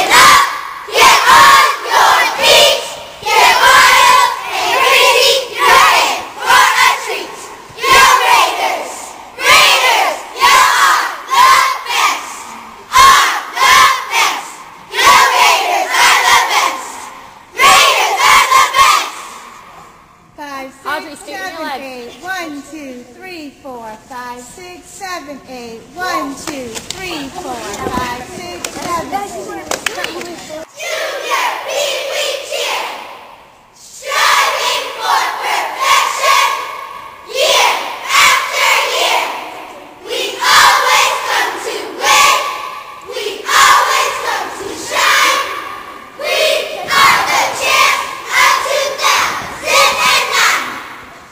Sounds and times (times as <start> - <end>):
Speech: 20.4 - 30.7.